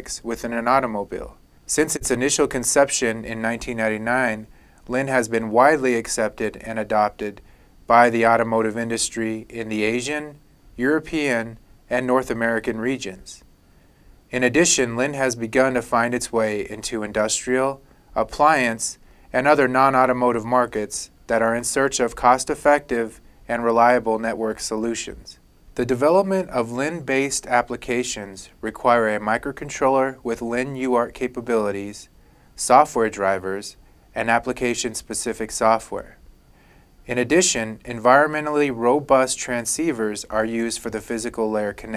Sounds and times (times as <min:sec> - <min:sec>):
Speech: 0:00.0 - 0:13.4, 0:14.3 - 0:36.2, 0:37.1 - 0:41.9.